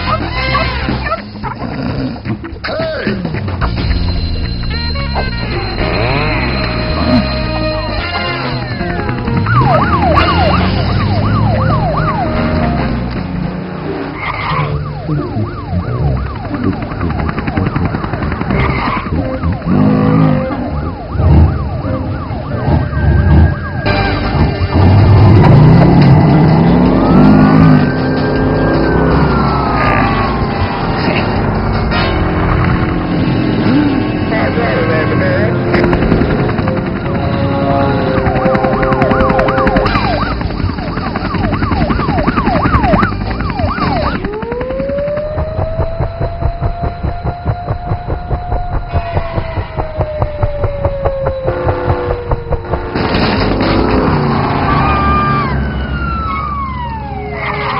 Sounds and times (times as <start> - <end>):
Music: 0.0 - 14.1, 19.1 - 44.2.